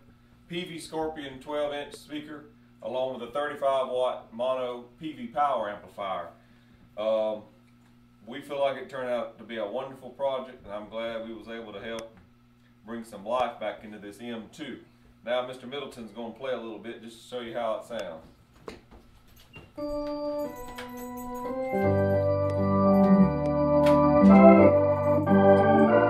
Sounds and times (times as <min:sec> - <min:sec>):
Speech: 0:00.5 - 0:06.4, 0:07.0 - 0:07.5, 0:08.2 - 0:12.2, 0:12.8 - 0:18.3.